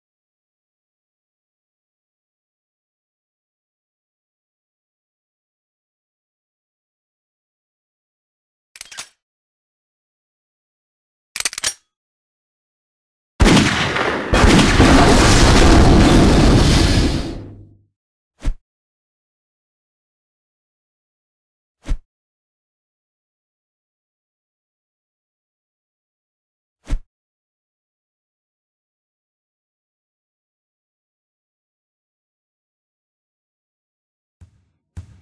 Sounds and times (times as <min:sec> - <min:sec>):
Silence: 0:15.7 - 0:17.8.